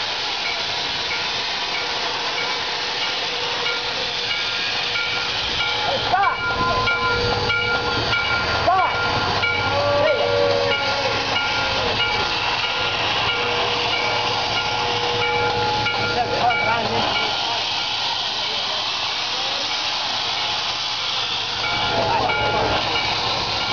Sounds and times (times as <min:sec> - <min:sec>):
Heavy engine (low frequency): 0:00.0 - 0:23.7
Speech: 0:15.8 - 0:20.2, 0:21.8 - 0:23.0.